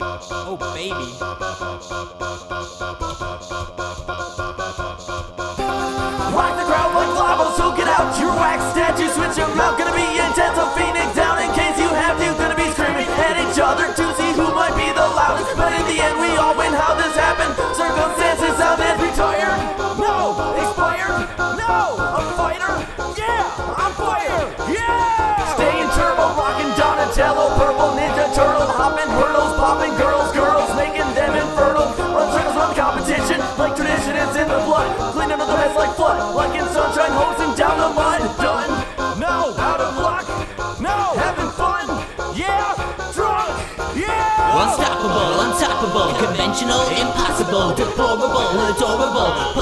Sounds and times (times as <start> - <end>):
Music: 0.0 - 49.6.